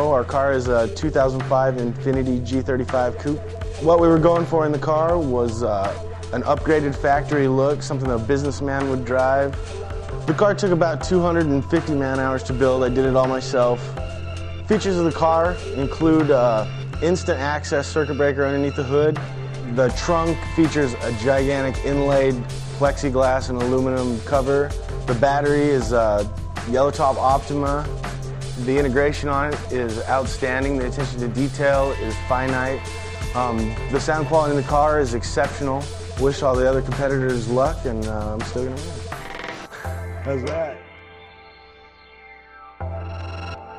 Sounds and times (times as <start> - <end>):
Speech: 0.0 - 9.6, 10.3 - 13.9, 14.7 - 27.9, 28.6 - 32.8, 33.4 - 38.9, 40.3 - 40.8
Music: 0.0 - 43.7.